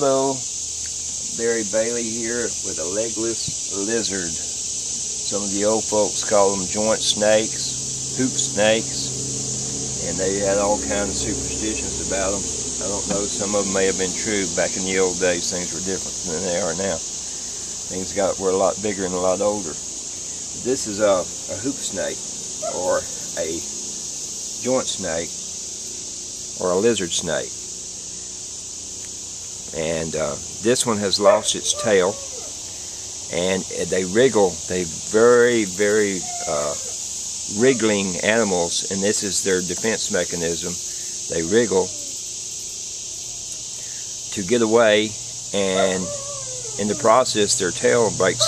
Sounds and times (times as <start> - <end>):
Hiss: 0.0 - 46.1.